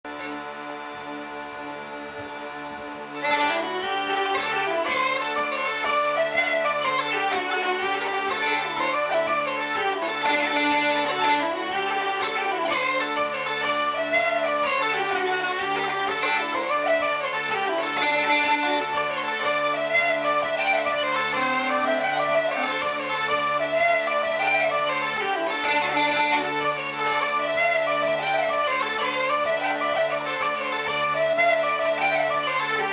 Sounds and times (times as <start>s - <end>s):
Bagpipes: 0.1s - 32.9s.